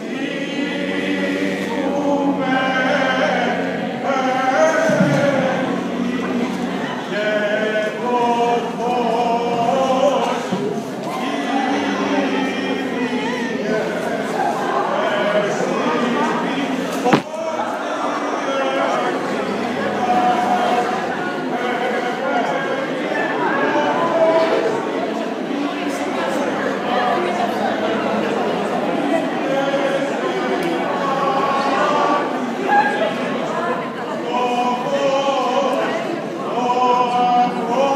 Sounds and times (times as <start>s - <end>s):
Speech: 1.7s - 37.9s.